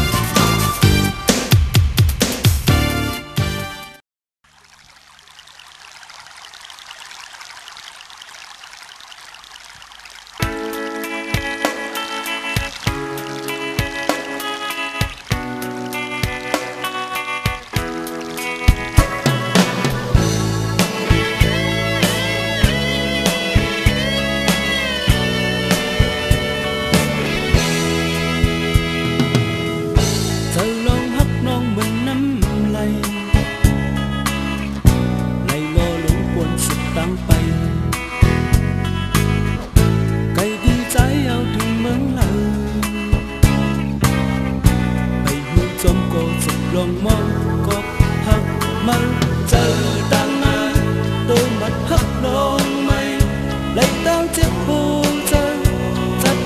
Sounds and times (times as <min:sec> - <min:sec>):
Music: 0:00.0 - 0:04.0, 0:10.4 - 0:56.4.